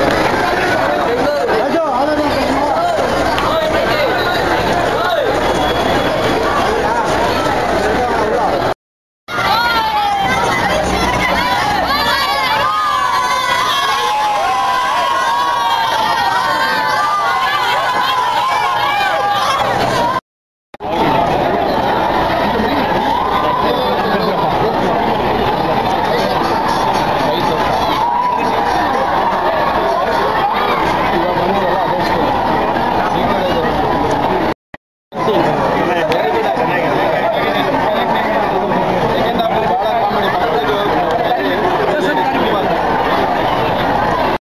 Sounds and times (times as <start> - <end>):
Speech: 0.0 - 14.2, 20.8 - 34.5, 35.2 - 44.4.